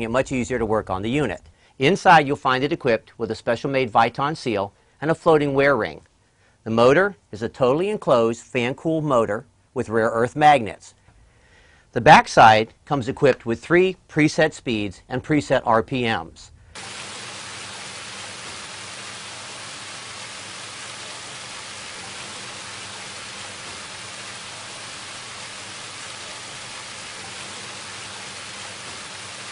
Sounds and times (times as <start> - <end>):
Speech: 0.0 - 11.0, 11.9 - 16.6.